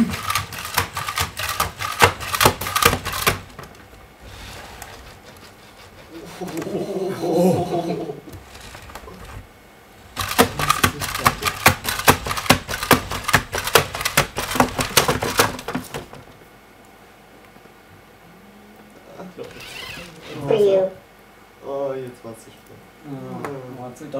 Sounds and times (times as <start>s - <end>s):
Typewriter: 0.0s - 3.8s, 10.2s - 16.2s
Inside, small room: 0.0s - 24.1s.